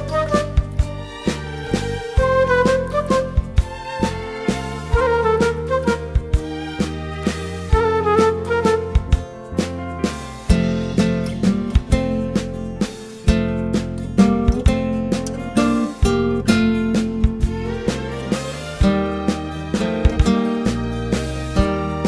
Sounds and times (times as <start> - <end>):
Happy music: 0.0 - 22.0.